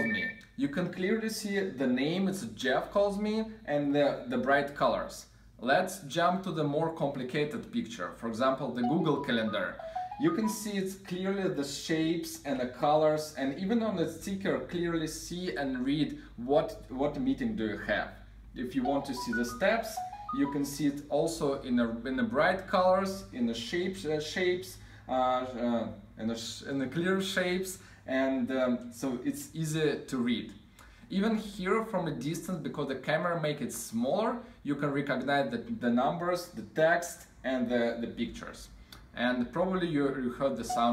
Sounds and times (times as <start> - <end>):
Speech: 0.0 - 40.9.